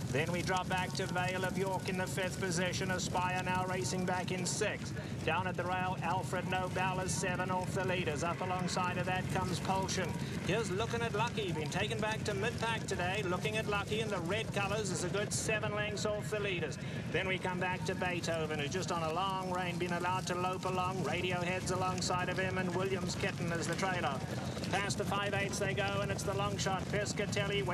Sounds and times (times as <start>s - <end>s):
Speech: 0.1s - 27.7s.